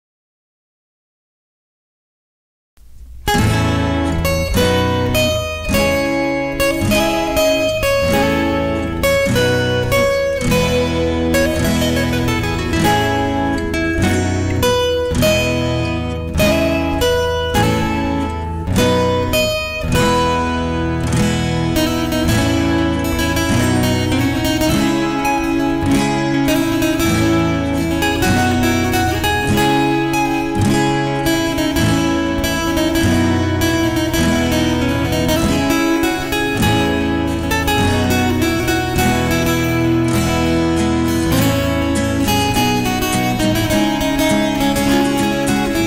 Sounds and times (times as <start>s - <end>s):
Acoustic guitar: 2.8s - 45.8s
Strum: 2.8s - 45.8s.